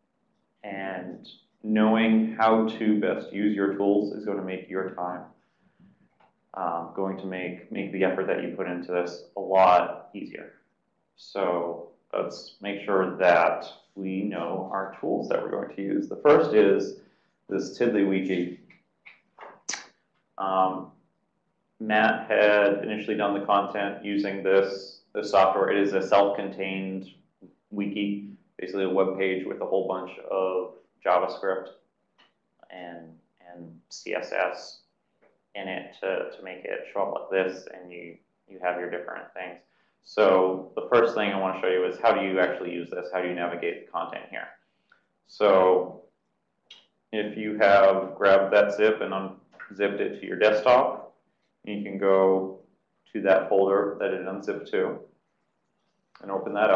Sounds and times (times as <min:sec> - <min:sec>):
Speech: 0:00.6 - 0:05.3, 0:06.6 - 0:10.5, 0:11.2 - 0:18.6, 0:20.4 - 0:20.9, 0:21.8 - 0:31.7, 0:32.6 - 0:34.8, 0:35.6 - 0:44.6, 0:45.3 - 0:46.0, 0:47.2 - 0:55.0, 0:56.2 - 0:56.7.